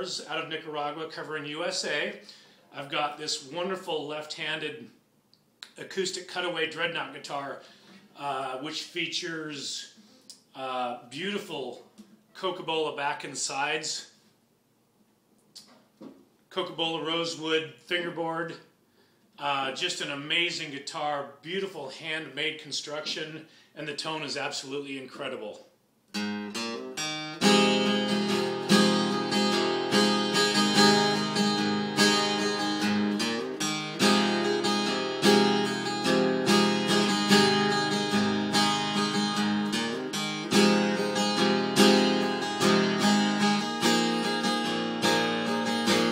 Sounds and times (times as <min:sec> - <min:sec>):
Speech: 0:00.0 - 0:05.0, 0:05.6 - 0:07.6, 0:08.2 - 0:14.2, 0:16.5 - 0:18.7, 0:19.4 - 0:25.7.